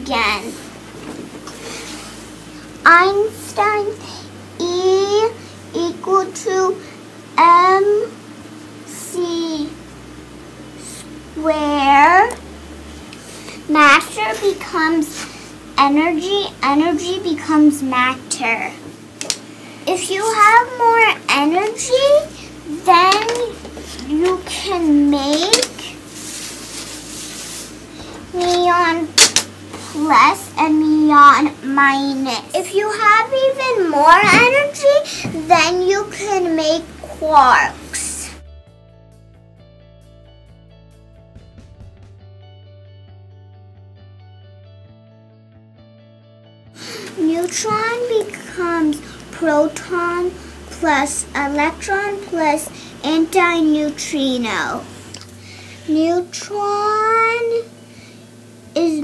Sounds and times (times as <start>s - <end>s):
Speech: 0.0s - 0.6s, 2.8s - 4.0s, 4.6s - 6.8s, 7.4s - 8.1s, 9.0s - 9.8s, 10.8s - 12.4s, 13.7s - 15.2s, 15.8s - 18.8s, 19.9s - 25.9s, 28.3s - 29.1s, 29.9s - 38.4s, 47.2s - 54.9s, 55.9s - 57.7s, 58.8s - 59.0s.